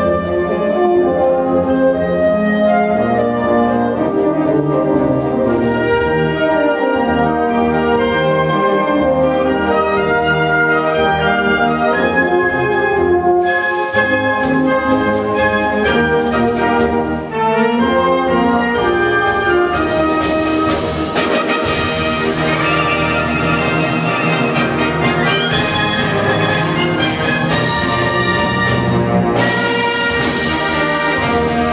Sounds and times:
Inside, public space: 0.0s - 31.7s
Orchestra: 0.0s - 31.7s.

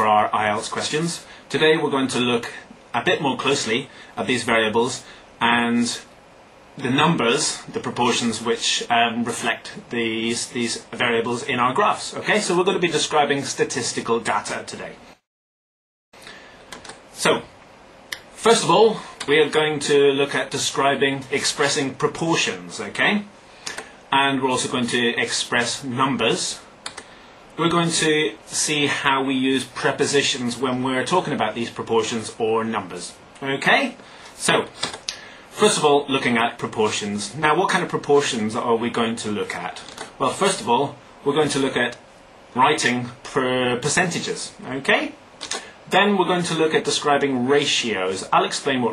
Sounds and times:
Speech: 0.0s - 6.1s, 6.8s - 15.2s, 17.2s - 17.6s, 18.2s - 23.4s, 24.1s - 26.7s, 27.6s - 48.9s.

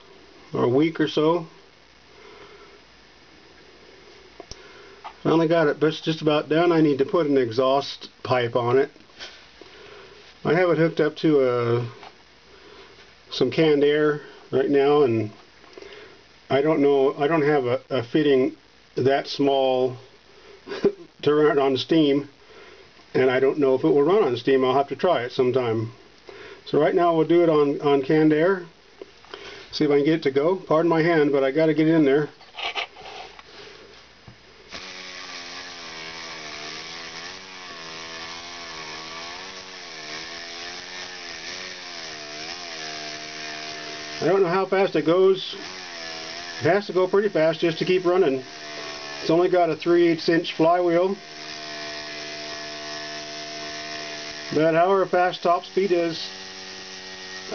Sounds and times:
Speech: 0.5s - 1.6s, 5.2s - 9.0s, 10.4s - 12.1s, 13.3s - 15.4s, 16.5s - 20.1s, 21.2s - 22.3s, 23.1s - 26.0s, 26.7s - 28.7s, 29.7s - 32.4s, 44.2s - 45.6s, 46.6s - 48.5s, 49.2s - 51.2s, 54.5s - 56.4s.

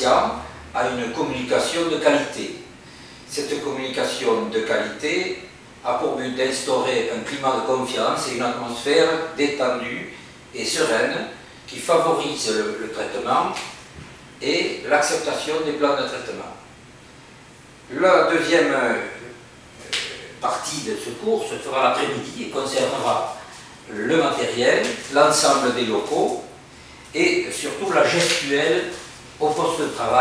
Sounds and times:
Speech: 0.0s - 2.7s, 3.3s - 13.8s, 14.4s - 16.7s, 17.9s - 30.2s.

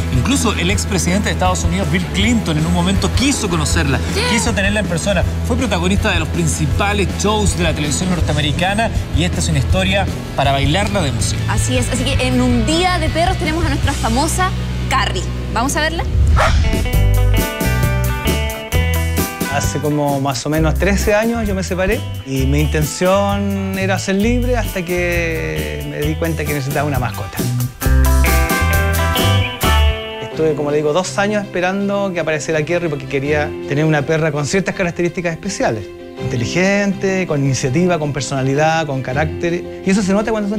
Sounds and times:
Music: 0.0s - 40.5s
Speech: 0.2s - 14.2s, 19.5s - 27.5s, 30.2s - 40.5s.

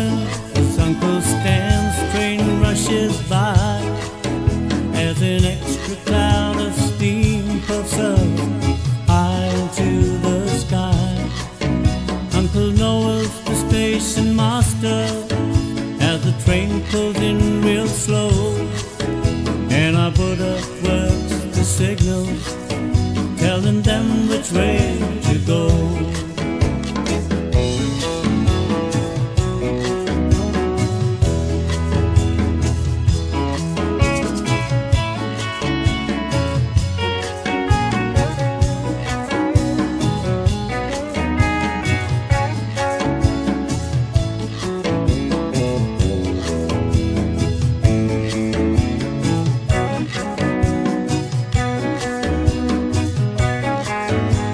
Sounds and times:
Music: 0.0s - 54.5s.

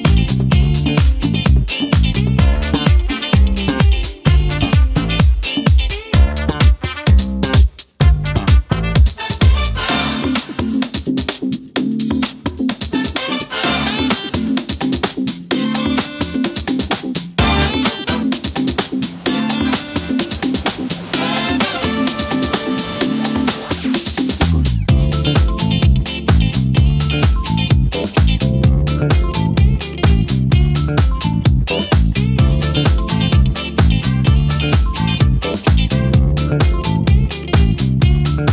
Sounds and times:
Music: 0.0s - 38.5s.

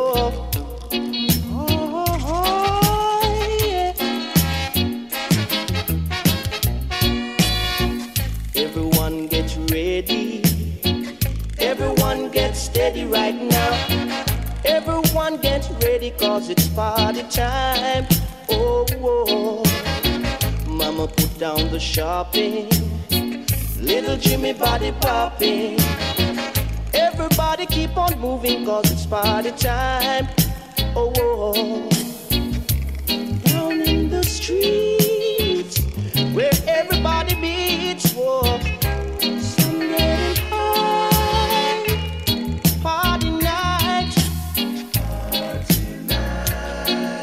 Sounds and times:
Music: 0.0s - 47.2s.

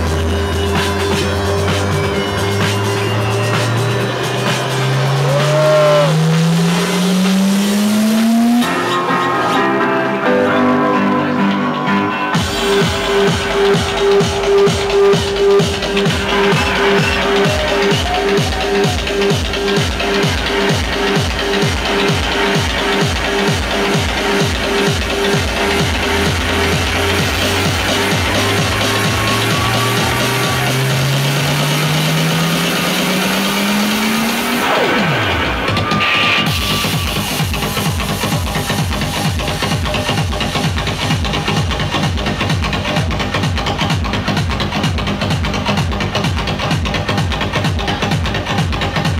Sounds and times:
Electronic music: 0.0s - 49.1s
Inside, public space: 0.0s - 49.1s.

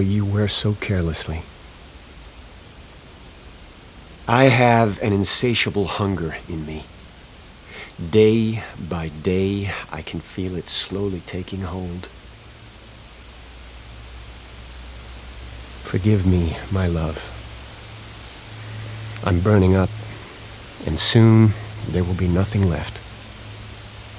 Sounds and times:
Speech: 0.0s - 1.5s, 4.3s - 6.9s, 8.0s - 12.1s, 15.8s - 17.4s, 19.2s - 19.9s, 20.8s - 23.0s.

